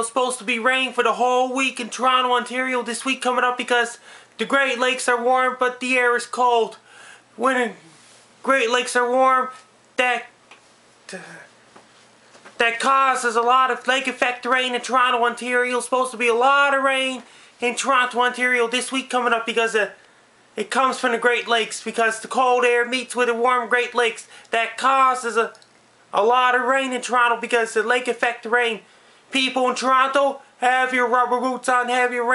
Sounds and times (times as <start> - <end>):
Speech: 0.0 - 6.8, 7.4 - 10.4, 11.1 - 11.5, 12.6 - 20.0, 20.6 - 32.3.